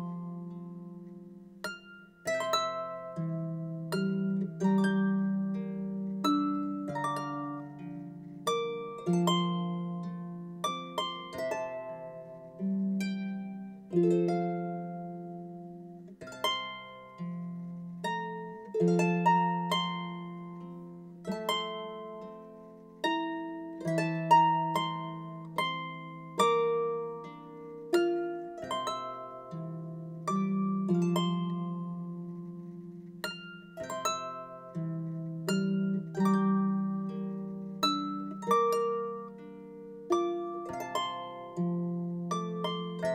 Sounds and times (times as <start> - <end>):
Harp: 0.0 - 43.1
Pizzicato: 0.0 - 43.1.